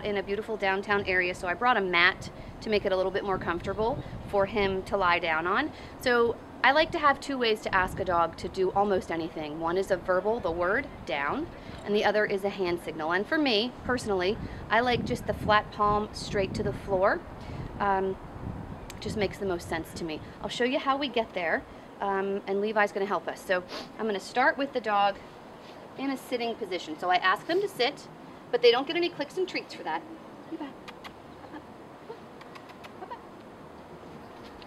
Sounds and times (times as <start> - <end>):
Speech: 0.0 - 17.2, 17.8 - 18.2, 18.9 - 25.2, 26.0 - 30.8.